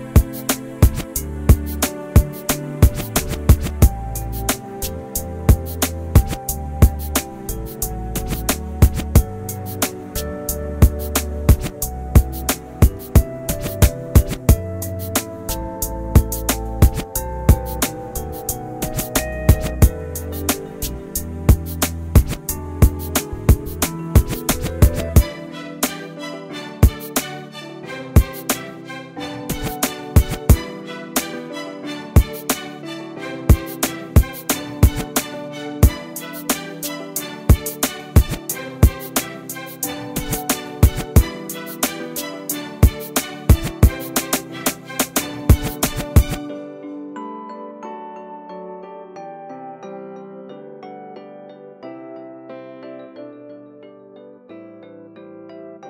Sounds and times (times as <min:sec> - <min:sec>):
Music: 0:00.0 - 0:55.8.